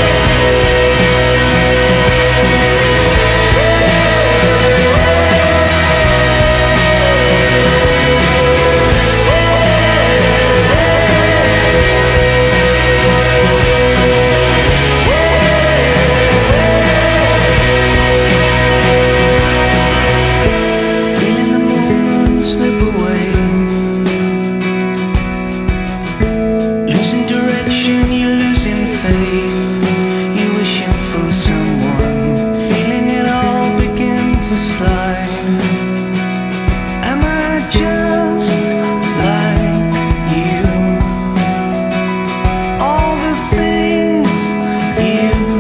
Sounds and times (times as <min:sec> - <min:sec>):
Music: 0:00.0 - 0:45.6.